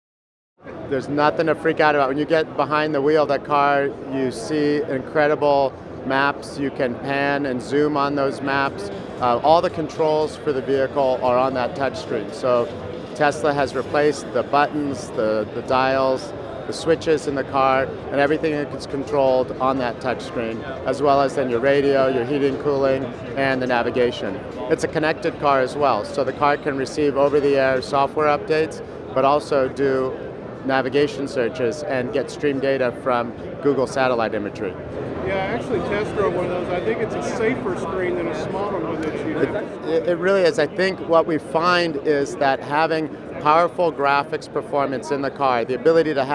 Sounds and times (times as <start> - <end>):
Speech: 0.9 - 46.3.